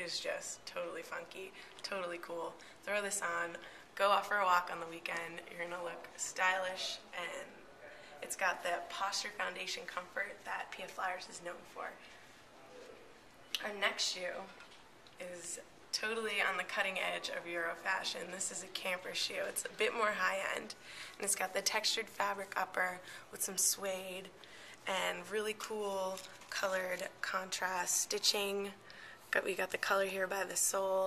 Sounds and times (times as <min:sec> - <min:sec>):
Speech: 0:00.0 - 0:12.0, 0:12.6 - 0:14.6, 0:15.2 - 0:24.3, 0:24.9 - 0:31.0.